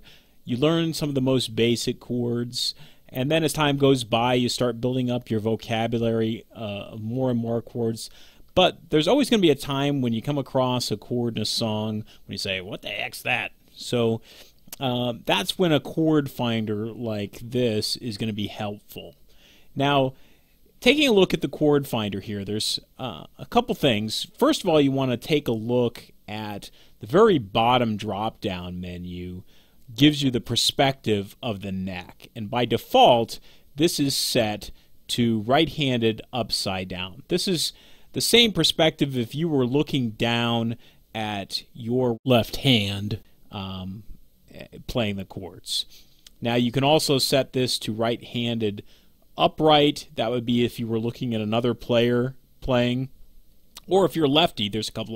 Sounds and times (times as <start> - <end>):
Speech: 0.0 - 14.2, 14.8 - 19.2, 19.8 - 20.2, 20.8 - 48.8, 49.4 - 53.2, 53.8 - 55.1.